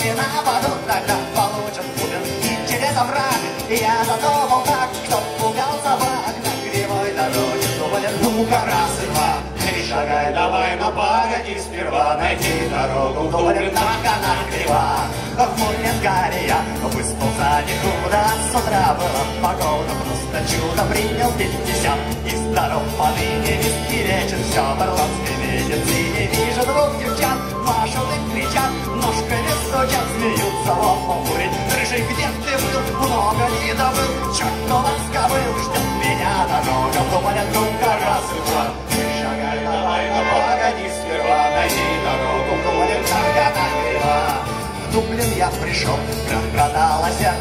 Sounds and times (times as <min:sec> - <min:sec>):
Music: 0:00.0 - 0:47.4.